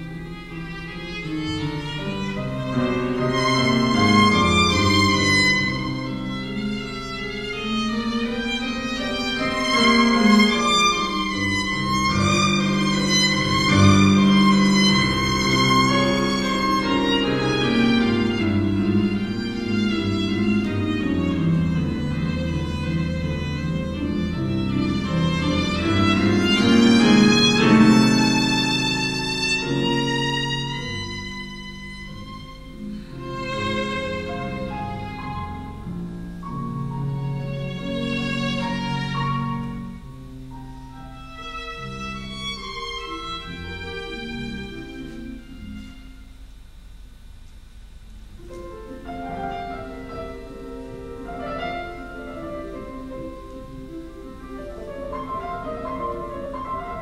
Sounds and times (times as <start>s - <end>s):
Violin, fiddle: 0.0s - 35.9s, 36.8s - 40.0s, 41.1s - 46.4s.